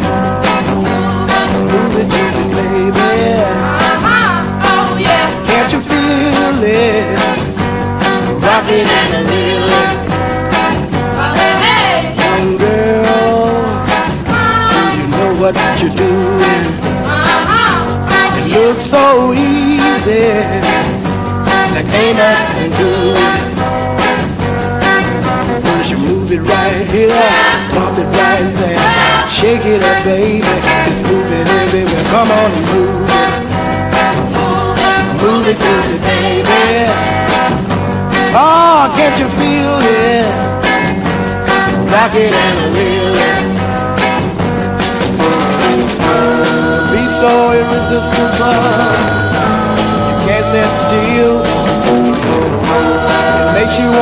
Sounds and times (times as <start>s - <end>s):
Music: 0.0s - 54.0s
Male singing: 1.3s - 3.7s, 5.0s - 7.4s, 8.4s - 9.9s, 12.2s - 13.7s, 14.7s - 16.8s, 18.3s - 20.8s, 21.7s - 23.5s, 25.6s - 33.3s, 34.4s - 37.0s, 38.3s - 40.4s, 41.9s - 43.4s, 45.2s - 49.4s, 50.2s - 52.0s, 52.7s - 54.0s.